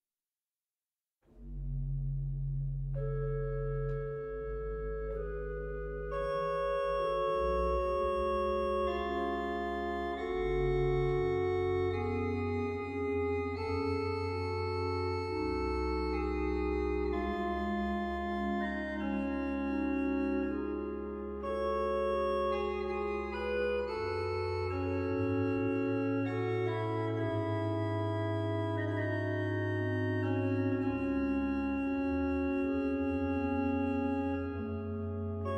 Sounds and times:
Keyboard (musical): 0:01.3 - 0:35.5.

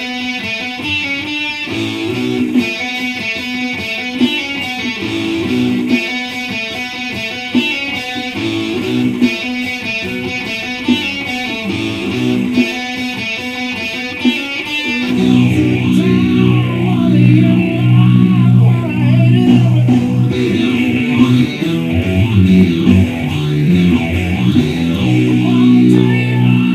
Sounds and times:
Strum: 0:14.9 - 0:26.7.

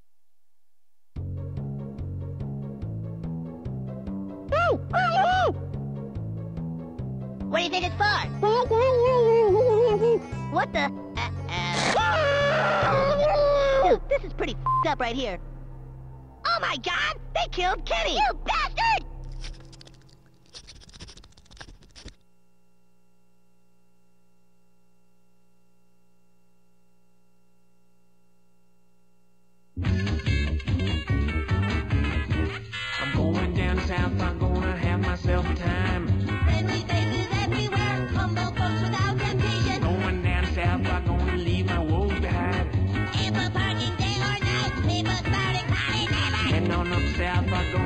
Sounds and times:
Music: 0:01.2 - 0:20.1, 0:29.8 - 0:47.8
Speech: 0:07.5 - 0:10.9, 0:12.9 - 0:15.4, 0:16.5 - 0:19.1.

